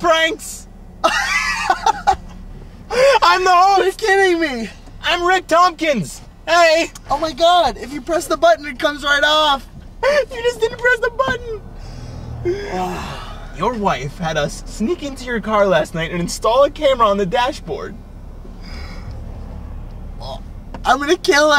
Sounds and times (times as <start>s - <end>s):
Speech: 0.0s - 0.7s, 3.2s - 11.6s, 13.6s - 18.0s, 20.2s - 21.5s.